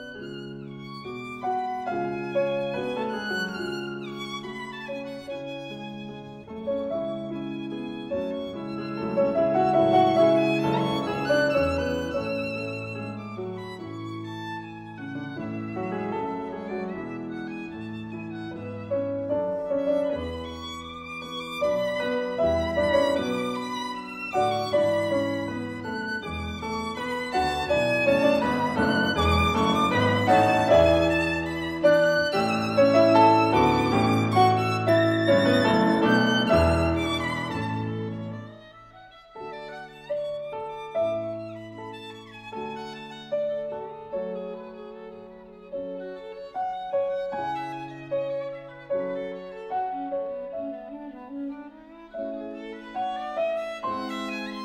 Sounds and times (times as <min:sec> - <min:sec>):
Violin, fiddle: 0:00.0 - 0:54.6.